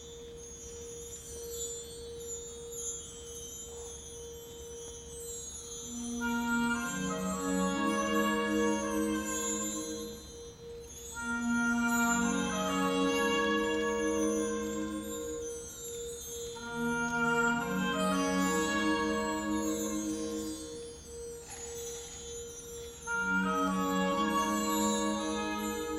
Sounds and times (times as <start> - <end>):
Music: 0.0 - 25.9.